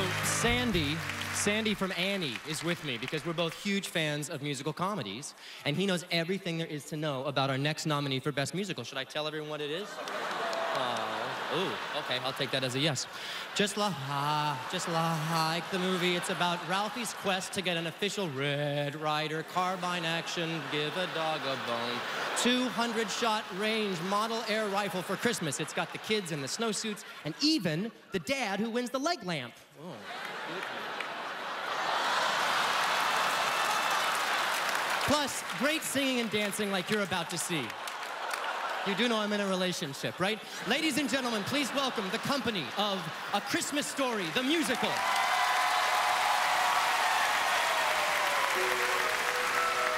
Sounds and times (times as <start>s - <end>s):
Speech: 0.0s - 10.0s, 10.8s - 30.0s, 35.1s - 37.7s, 38.9s - 45.0s.